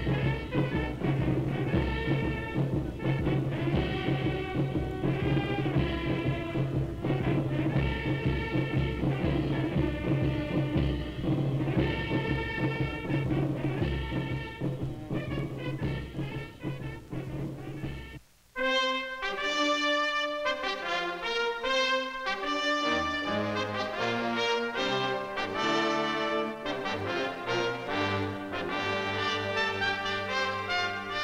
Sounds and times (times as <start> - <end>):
Brass instrument: 0.0 - 31.2.